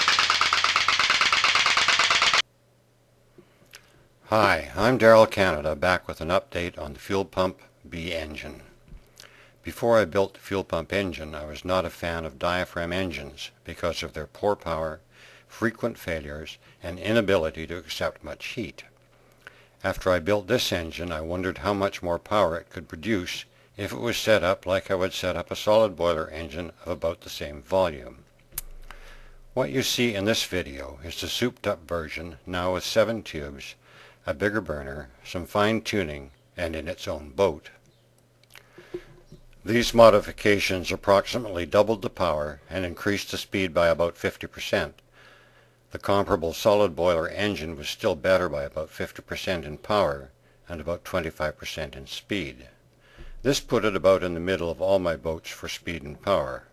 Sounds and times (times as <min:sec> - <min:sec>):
Speech: 0:04.3 - 0:08.7, 0:09.7 - 0:18.9, 0:19.8 - 0:28.2, 0:29.6 - 0:37.8, 0:39.7 - 0:45.0, 0:45.9 - 0:52.8, 0:53.4 - 0:56.7.